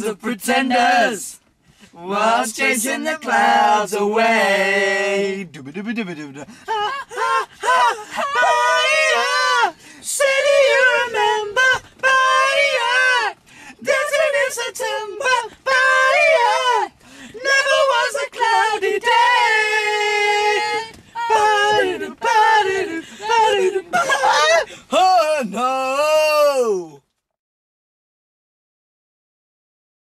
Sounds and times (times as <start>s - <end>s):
Speech: 23.5s - 27.0s.